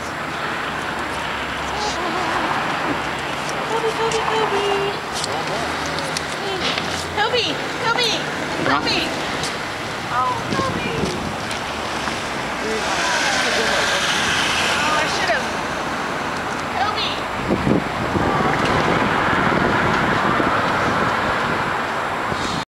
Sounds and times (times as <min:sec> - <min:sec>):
Car: 0:00.0 - 0:22.6
Outside, urban or manmade: 0:00.0 - 0:22.7.